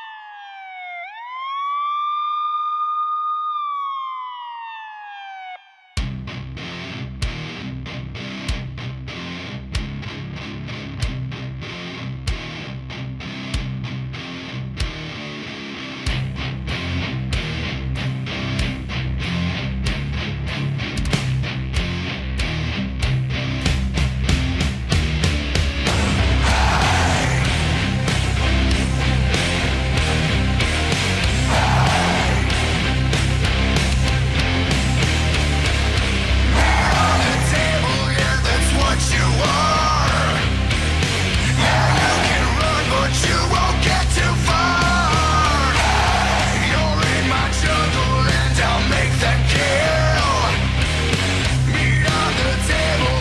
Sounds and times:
Music: 6.0 - 53.2.

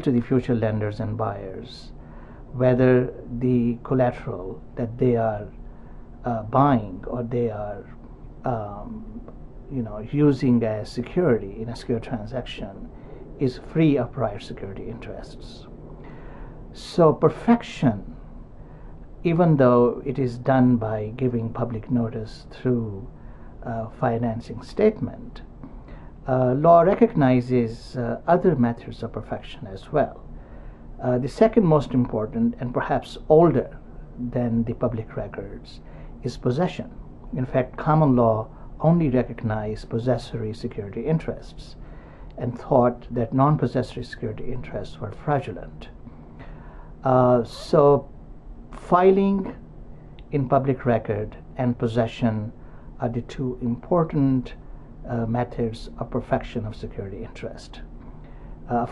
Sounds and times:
Speech: 0.0 - 5.6, 6.2 - 15.7, 16.7 - 18.2, 19.2 - 25.5, 26.2 - 30.3, 31.0 - 46.0, 47.0 - 48.1, 48.8 - 49.6, 50.2 - 57.9, 58.7 - 58.9.

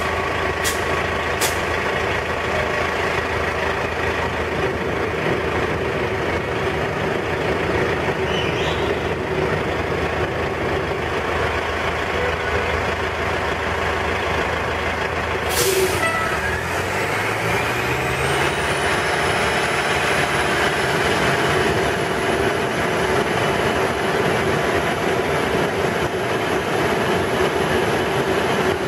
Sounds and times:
Vehicle: 0.0 - 28.8
Accelerating, revving, vroom: 16.4 - 22.4.

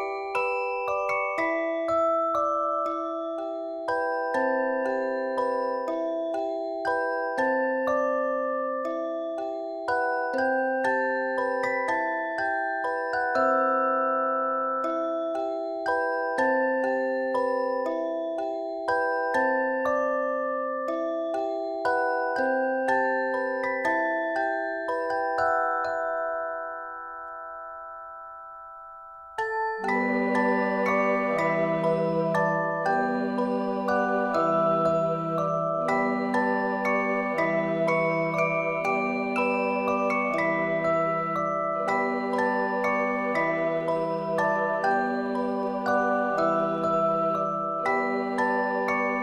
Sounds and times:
Music: 0.0 - 49.2.

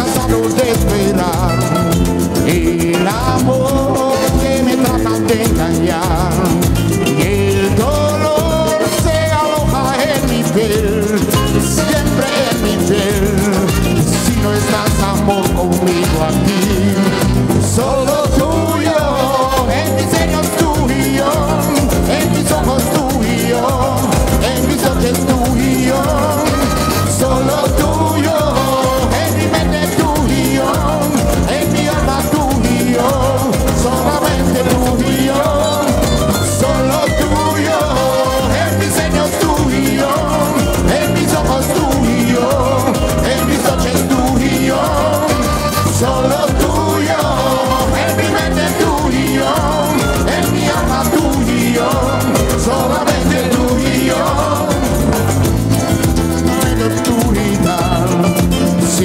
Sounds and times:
Salsa music: 0.0 - 59.0.

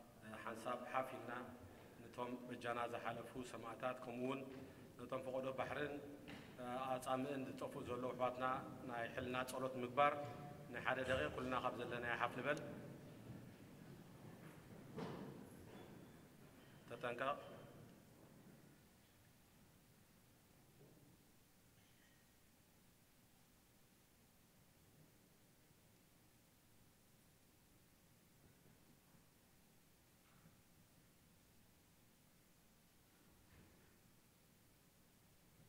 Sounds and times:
Male speech, man speaking: 0.2 - 12.8, 16.9 - 17.6.

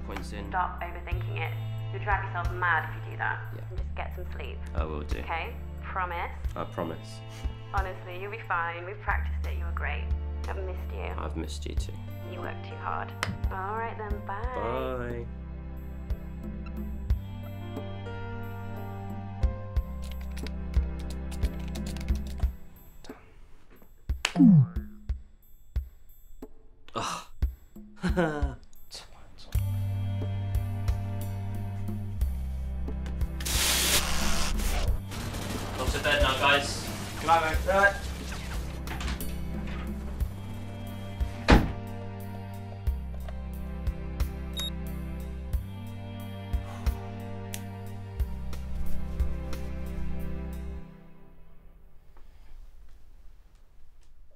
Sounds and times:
Music: 0.0 - 53.0
Speech: 10.6 - 15.3.

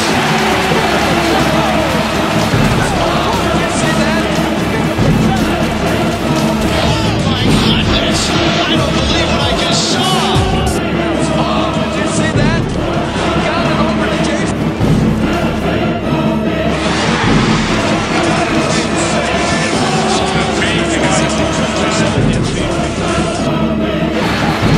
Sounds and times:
Music: 0.0 - 24.7
Speech: 6.6 - 10.8, 18.6 - 22.9.

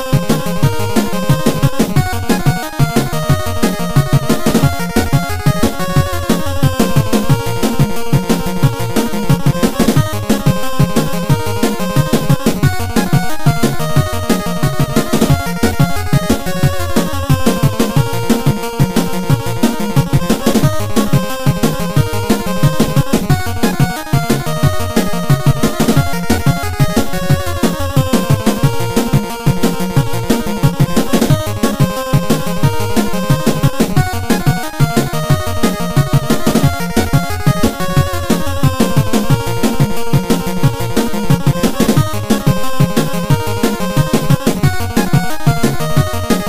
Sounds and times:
Music: 0.0 - 46.4.

